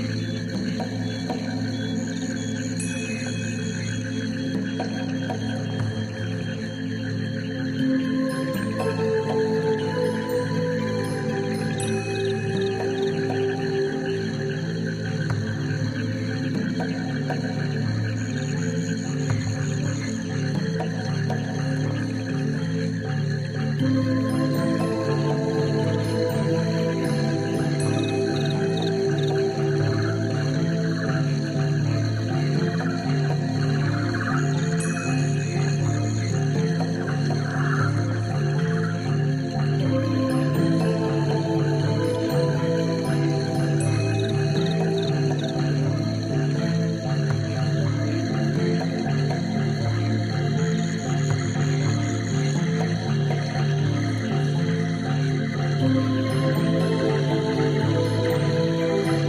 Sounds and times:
Music: 0.0s - 59.2s.

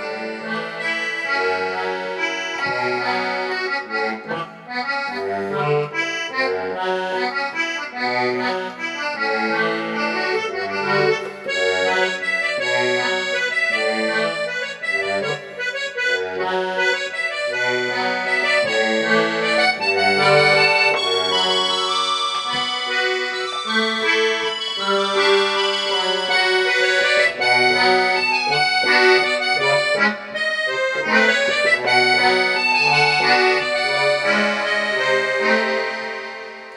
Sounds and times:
Music: 0.0s - 36.7s.

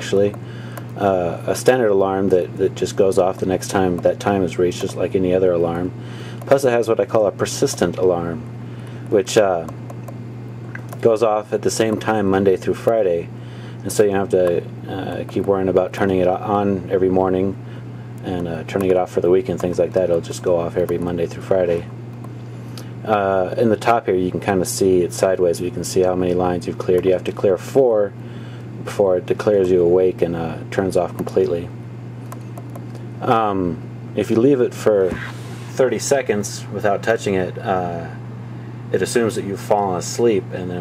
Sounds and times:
Speech: 0.0s - 0.4s, 1.0s - 8.5s, 9.1s - 9.8s, 11.0s - 17.6s, 18.2s - 21.9s, 23.0s - 28.2s, 28.8s - 31.8s, 33.2s - 38.2s, 38.9s - 40.8s.

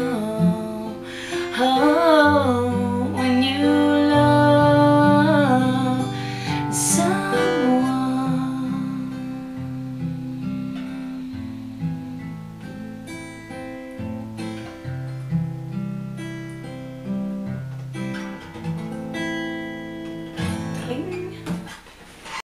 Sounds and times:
Acoustic guitar: 0.0s - 22.4s
Strum: 0.0s - 22.4s
Speech: 20.8s - 21.4s.

